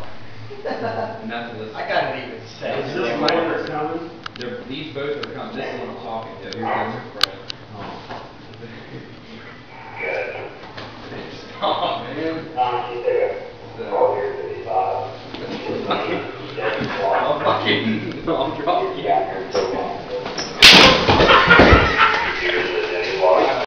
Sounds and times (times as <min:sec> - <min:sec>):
Speech: 0:11.8 - 0:20.2, 0:22.3 - 0:23.6.